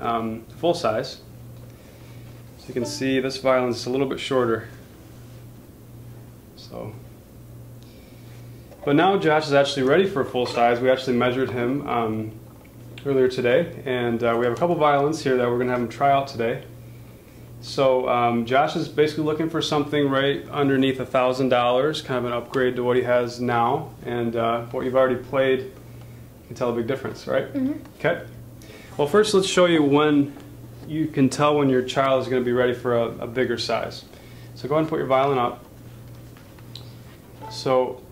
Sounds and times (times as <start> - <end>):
Speech: 0.0 - 1.3, 2.6 - 4.8, 6.6 - 7.0, 8.8 - 12.4, 13.0 - 16.7, 17.6 - 25.7, 26.5 - 28.4, 29.0 - 35.6, 37.4 - 38.1.